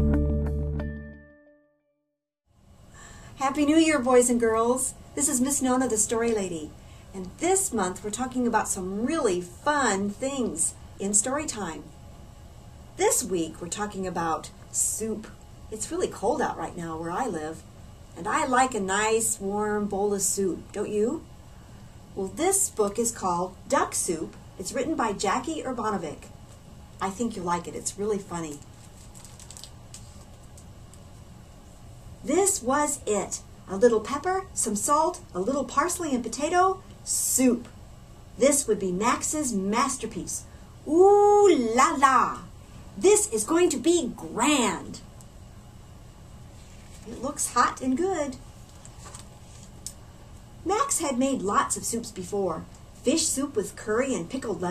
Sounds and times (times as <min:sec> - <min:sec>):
Speech: 0:03.4 - 0:11.9, 0:13.0 - 0:17.6, 0:18.2 - 0:21.3, 0:22.2 - 0:26.3, 0:27.0 - 0:28.6, 0:32.3 - 0:37.8, 0:38.4 - 0:45.1, 0:47.1 - 0:48.4, 0:50.7 - 0:54.7.